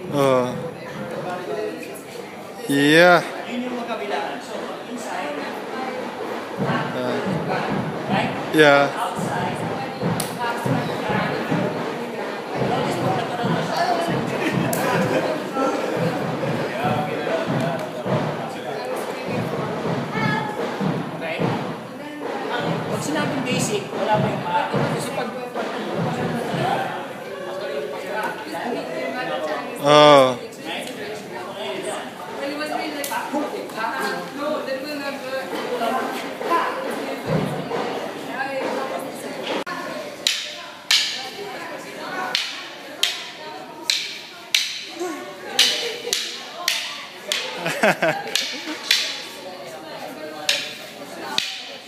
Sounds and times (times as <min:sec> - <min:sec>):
Inside, large room or hall: 0:00.0 - 0:51.8
Speech: 0:00.0 - 0:51.8.